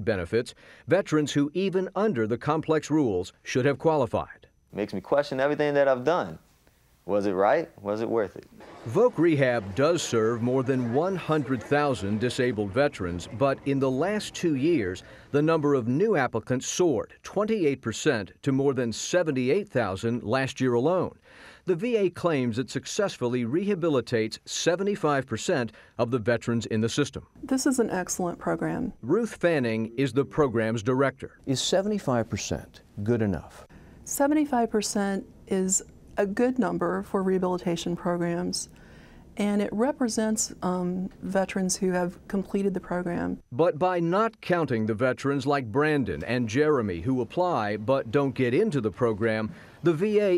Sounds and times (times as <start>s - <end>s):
Speech: 0.0s - 6.4s, 7.1s - 21.1s, 21.7s - 38.6s.